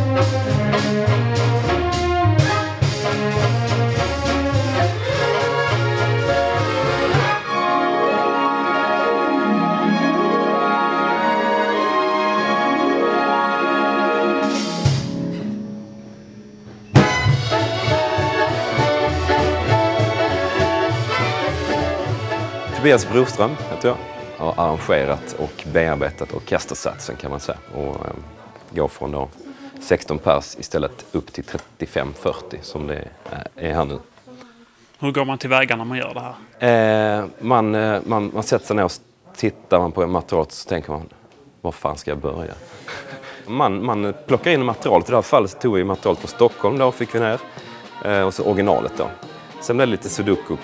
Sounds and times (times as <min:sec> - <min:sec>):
Speech: 0:22.8 - 0:50.6.